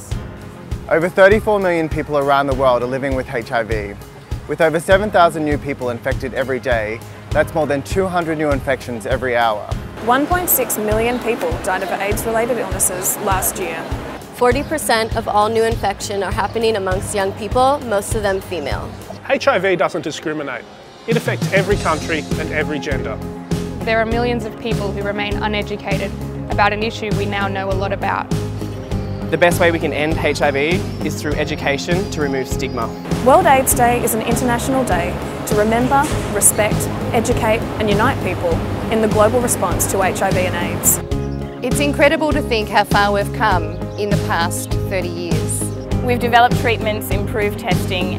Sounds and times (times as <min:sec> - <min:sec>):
Music: 0:00.0 - 0:48.1
Speech: 0:04.6 - 0:13.8, 0:14.4 - 0:23.2, 0:23.9 - 0:28.2, 0:29.4 - 0:41.0, 0:41.6 - 0:48.1.